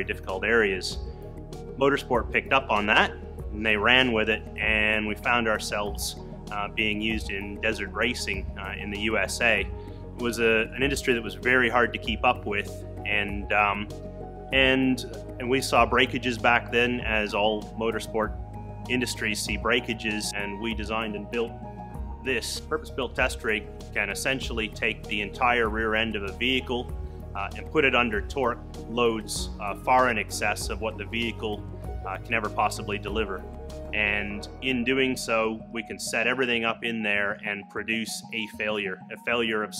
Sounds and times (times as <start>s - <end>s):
Speech: 0.0s - 1.0s, 1.8s - 13.9s, 14.6s - 18.3s, 18.9s - 21.6s, 22.3s - 33.4s, 34.0s - 39.7s
Music: 0.0s - 39.7s.